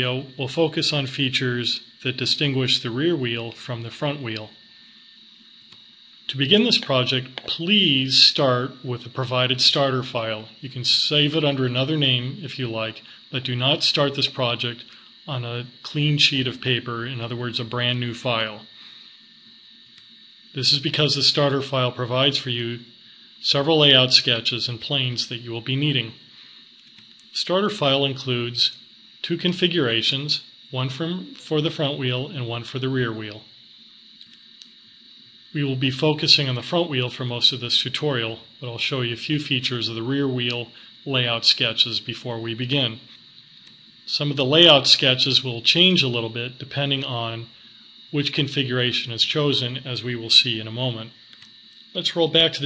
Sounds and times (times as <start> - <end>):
Speech: 0.0 - 4.6, 6.3 - 18.7, 20.6 - 26.2, 27.3 - 33.5, 35.5 - 43.1, 44.1 - 51.2, 51.9 - 52.6.